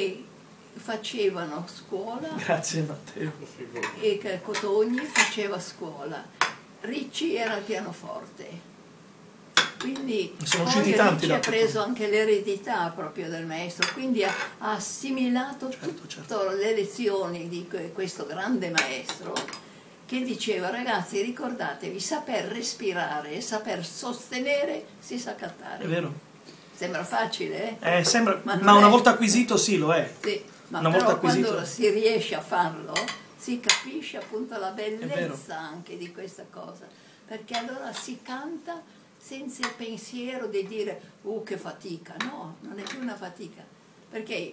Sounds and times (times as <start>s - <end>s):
Conversation: 0.0s - 44.5s.